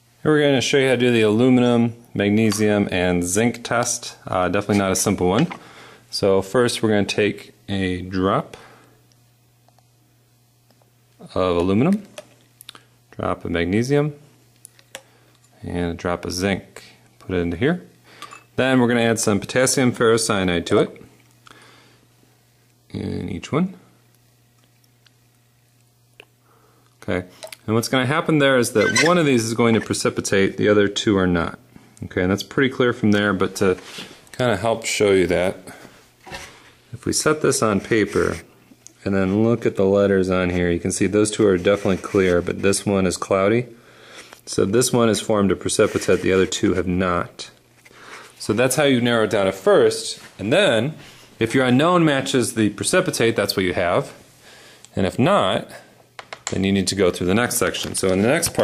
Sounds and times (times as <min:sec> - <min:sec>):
Speech: 0:00.2 - 0:08.6, 0:11.2 - 0:12.2, 0:13.1 - 0:14.3, 0:15.6 - 0:17.9, 0:18.6 - 0:21.1, 0:22.9 - 0:23.9, 0:27.0 - 0:33.8, 0:34.4 - 0:35.8, 0:36.9 - 0:43.8, 0:44.5 - 0:47.6, 0:48.4 - 0:54.2, 0:54.9 - 0:55.9, 0:56.5 - 0:58.6.